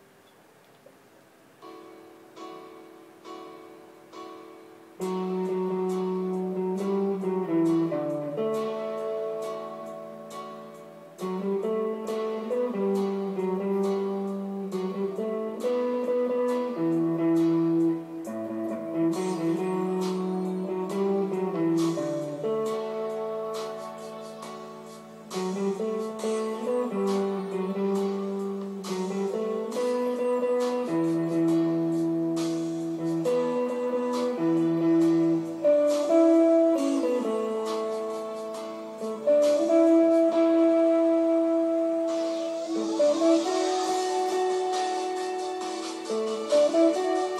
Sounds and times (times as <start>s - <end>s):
Electric guitar: 1.6s - 47.3s.